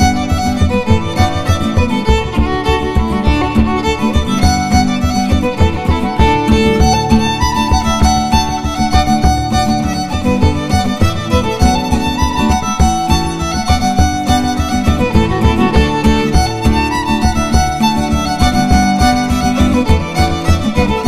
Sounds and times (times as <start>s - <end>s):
Violin, fiddle: 0.0s - 21.0s.